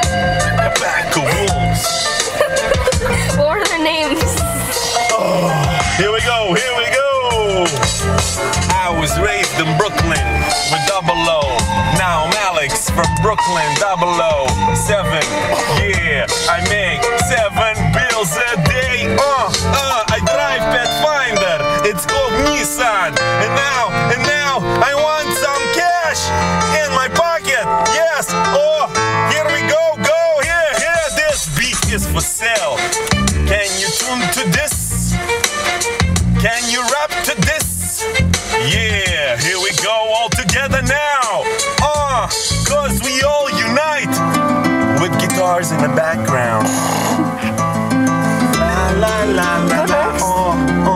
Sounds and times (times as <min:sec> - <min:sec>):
Soundtrack music: 0:00.0 - 0:50.9
Speech: 0:00.4 - 0:01.9, 0:03.1 - 0:07.8, 0:08.7 - 0:32.8, 0:33.4 - 0:35.1, 0:36.4 - 0:38.0, 0:38.6 - 0:44.2, 0:44.9 - 0:46.8, 0:48.6 - 0:50.9.